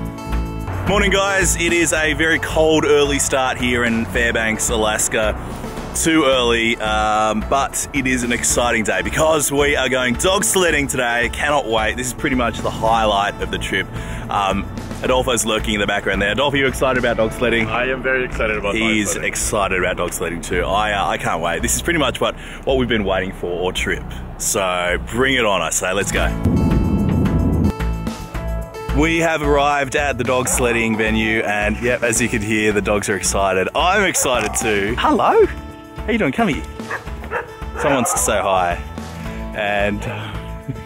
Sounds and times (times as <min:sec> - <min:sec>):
Music: 0:00.0 - 0:40.8
Speech: 0:00.9 - 0:05.4, 0:06.0 - 0:26.4, 0:29.0 - 0:36.7, 0:37.8 - 0:38.8, 0:39.6 - 0:40.8
Bow-wow: 0:18.6 - 0:19.3, 0:30.4 - 0:31.0, 0:34.1 - 0:34.9, 0:36.9 - 0:38.3
Yip: 0:34.2 - 0:34.7.